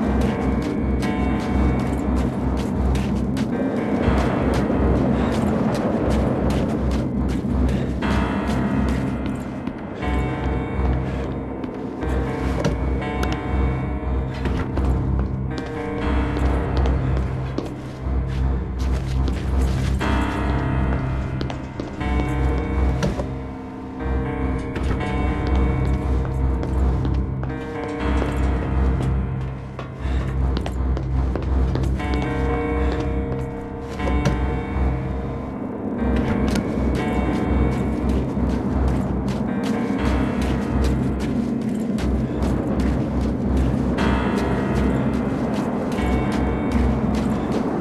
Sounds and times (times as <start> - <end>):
Music: 0.0 - 47.8.